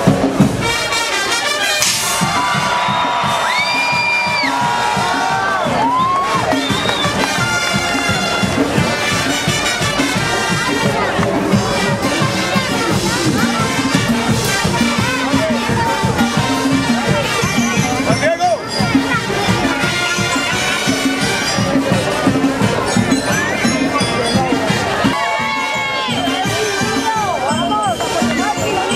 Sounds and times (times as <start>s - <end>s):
Crowd: 0.0s - 28.9s
Music: 0.0s - 28.9s
Outside, urban or manmade: 0.0s - 28.9s
Speech: 9.5s - 28.9s.